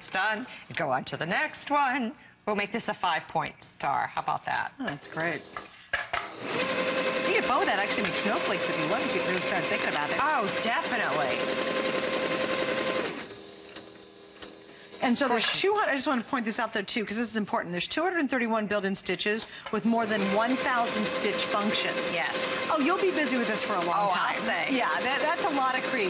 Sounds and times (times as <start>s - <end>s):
Sewing machine: 6.3s - 14.7s, 20.0s - 26.1s
Speech: 7.3s - 11.4s, 15.0s - 26.1s.